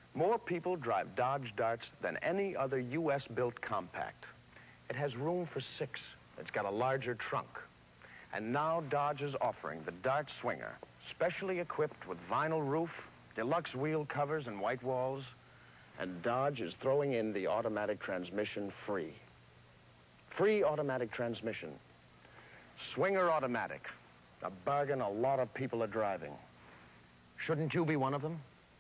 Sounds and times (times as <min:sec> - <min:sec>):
Speech: 0:00.2 - 0:07.7, 0:08.3 - 0:15.4, 0:16.0 - 0:19.3, 0:20.3 - 0:21.8, 0:22.8 - 0:26.5, 0:27.4 - 0:28.5.